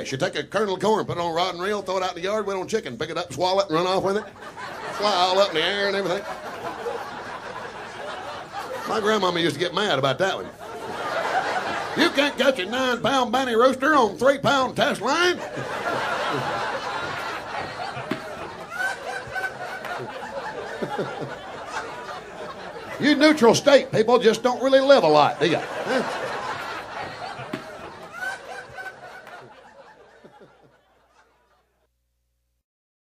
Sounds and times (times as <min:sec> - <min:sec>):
Speech: 0:00.0 - 0:04.3, 0:04.9 - 0:06.3, 0:08.8 - 0:10.6, 0:12.0 - 0:15.4, 0:23.0 - 0:26.0.